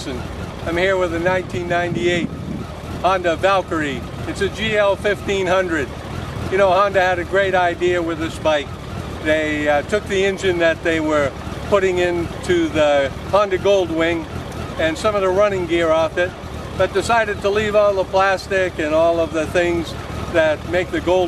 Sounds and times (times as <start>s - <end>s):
Speech: 0.0s - 2.3s, 3.0s - 5.9s, 6.5s - 21.2s.